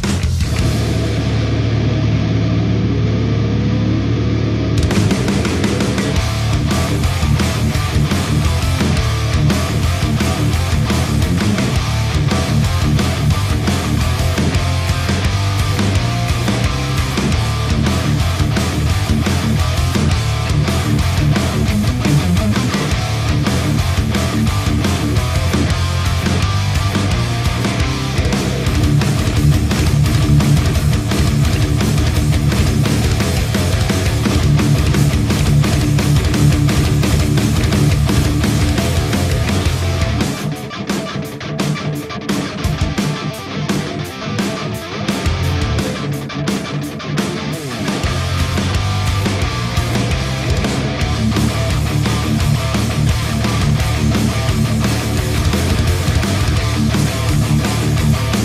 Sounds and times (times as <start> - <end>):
Bass guitar: 0.0 - 58.4
Electric guitar: 0.0 - 58.4
Strum: 0.1 - 41.1.